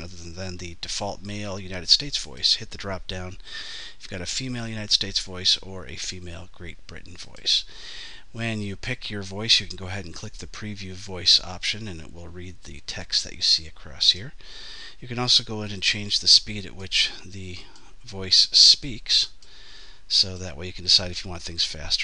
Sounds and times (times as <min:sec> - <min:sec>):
Speech: 0:00.0 - 0:07.7, 0:08.3 - 0:14.4, 0:15.0 - 0:19.4, 0:20.1 - 0:22.0.